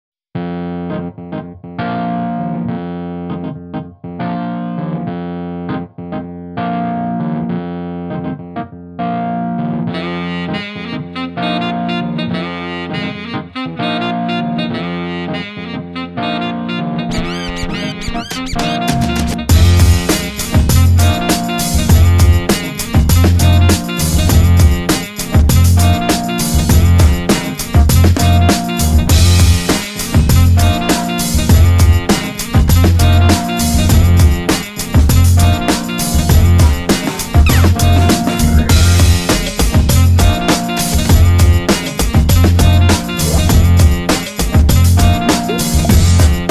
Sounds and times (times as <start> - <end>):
Distortion: 0.4 - 46.5
Effects unit: 0.4 - 46.5
Music: 0.4 - 46.5.